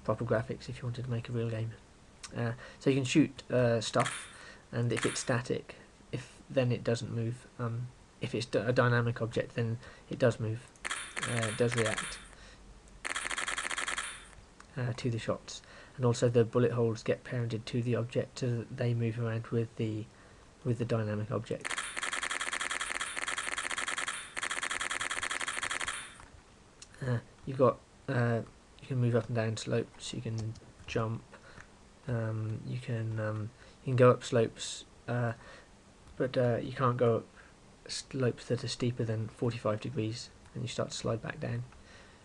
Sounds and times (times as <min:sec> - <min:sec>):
Speech: 0:00.0 - 0:04.1, 0:04.7 - 0:12.2, 0:14.7 - 0:21.6, 0:26.9 - 0:31.3, 0:32.1 - 0:35.4, 0:36.2 - 0:37.3, 0:37.9 - 0:41.7.